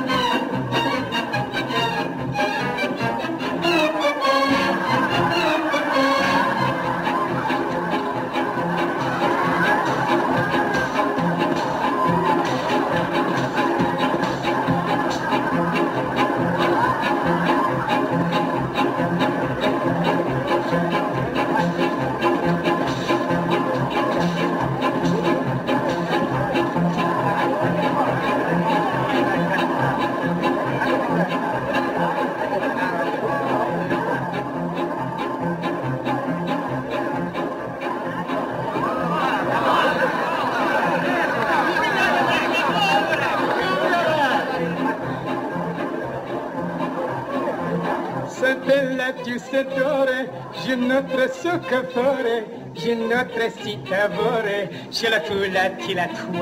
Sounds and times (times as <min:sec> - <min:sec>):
Chatter: 0:00.0 - 0:56.4
Inside, large room or hall: 0:00.0 - 0:56.4
Music: 0:00.0 - 0:56.4
Speech: 0:25.8 - 0:34.6, 0:38.8 - 0:45.8, 0:48.2 - 0:56.4.